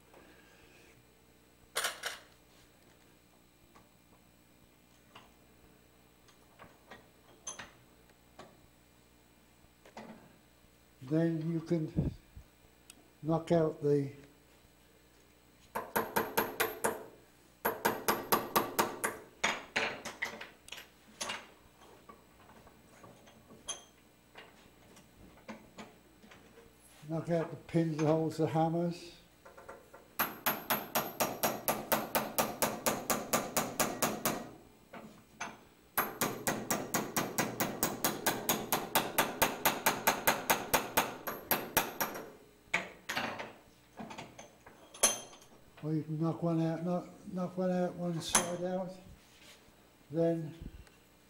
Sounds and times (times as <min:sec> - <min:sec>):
Hammer: 0:30.2 - 0:34.5, 0:36.0 - 0:42.3.